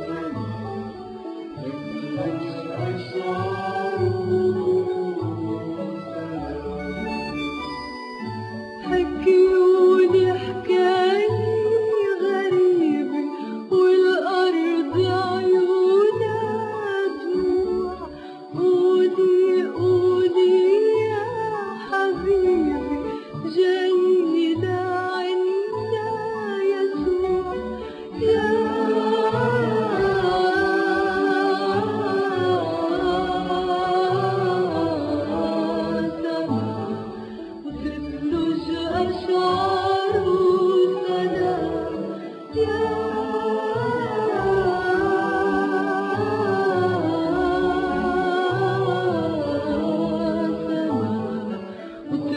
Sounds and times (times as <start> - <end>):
A capella: 0.0 - 7.6, 8.8 - 52.3.